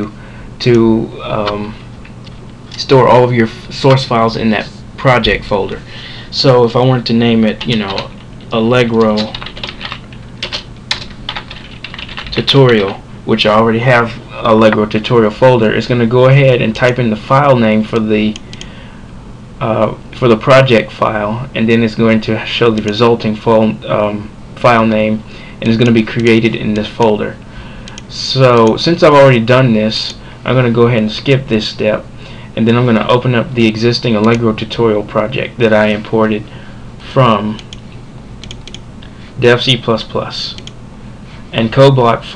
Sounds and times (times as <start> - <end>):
Speech: 0.0 - 1.8, 2.8 - 9.4, 12.3 - 18.4, 19.6 - 27.4, 28.1 - 37.7, 39.4 - 40.7, 41.5 - 42.3
Typing: 9.0 - 12.9.